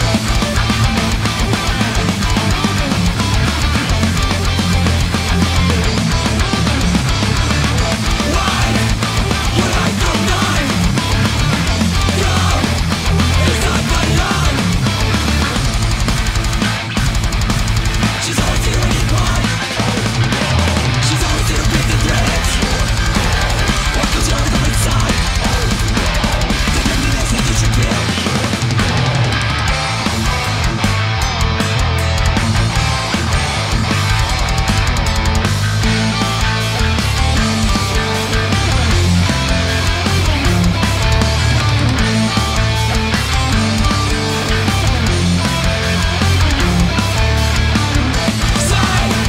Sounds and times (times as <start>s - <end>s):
Music: 0.0s - 49.2s.